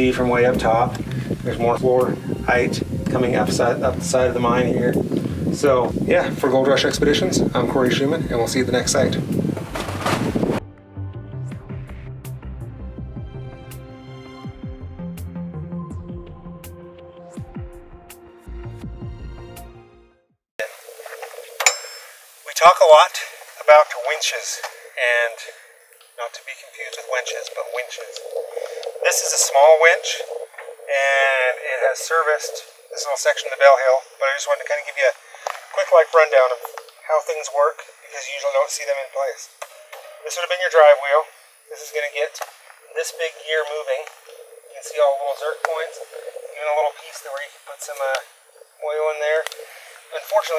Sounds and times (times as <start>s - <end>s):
Speech: 0.0s - 9.2s, 22.5s - 25.6s, 26.2s - 28.2s, 29.0s - 30.3s, 30.9s - 35.2s, 35.8s - 39.5s, 40.2s - 44.1s, 44.7s - 48.2s, 48.8s - 49.5s, 50.1s - 50.5s.